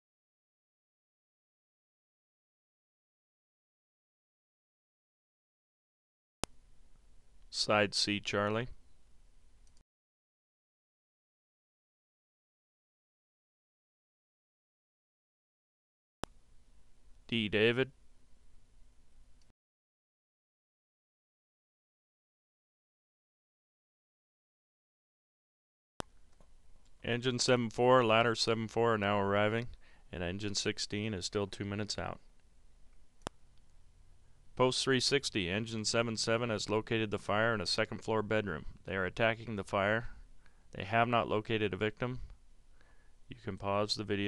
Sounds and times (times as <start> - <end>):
Speech: 7.5 - 8.8, 17.3 - 18.0, 27.0 - 32.2, 34.6 - 40.2, 40.8 - 42.3, 43.3 - 44.2.